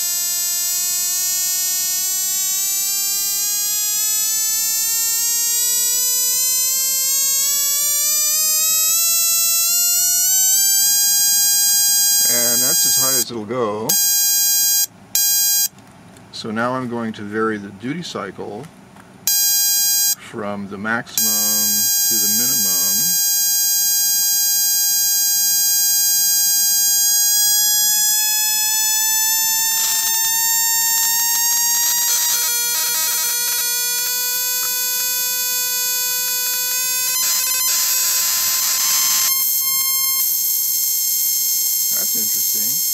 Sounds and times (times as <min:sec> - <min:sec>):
Speech: 0:12.3 - 0:13.9, 0:16.3 - 0:18.7, 0:20.2 - 0:23.1, 0:42.0 - 0:42.9.